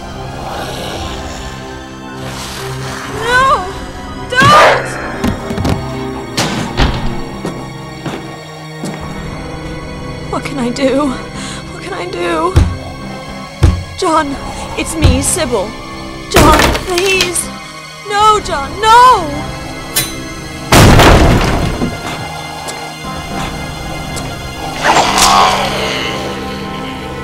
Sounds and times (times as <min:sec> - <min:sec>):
Music: 0:00.0 - 0:27.2.